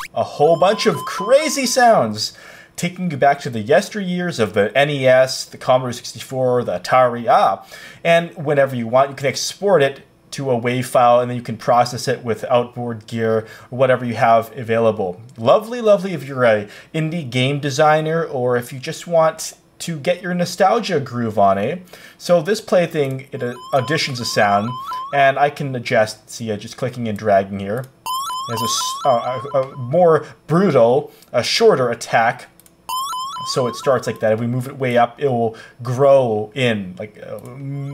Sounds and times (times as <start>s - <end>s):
Speech: 0.1s - 27.9s, 28.5s - 32.6s, 33.5s - 37.9s.